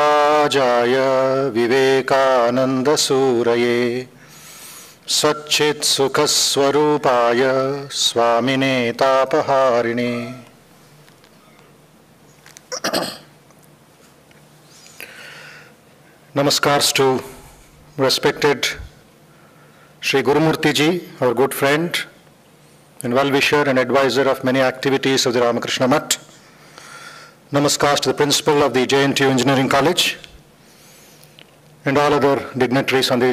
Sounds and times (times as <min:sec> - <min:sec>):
Narration, monologue: 0:00.0 - 0:33.3
Male speech, man speaking: 0:05.1 - 0:10.4, 0:16.4 - 0:17.4, 0:18.0 - 0:18.9, 0:20.0 - 0:22.2, 0:23.0 - 0:26.3, 0:27.5 - 0:30.3, 0:31.8 - 0:33.3.